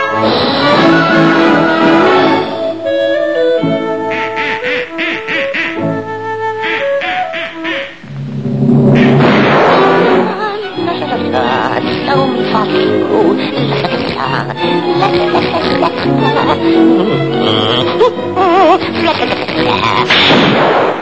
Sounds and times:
Music: 0:00.0 - 0:20.5
Quack: 0:06.6 - 0:07.9.

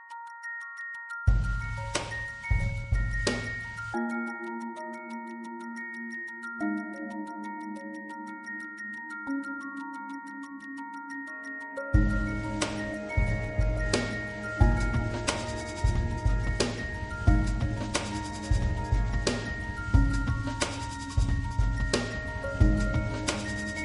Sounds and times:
Electronic music: 0:00.0 - 0:23.8.

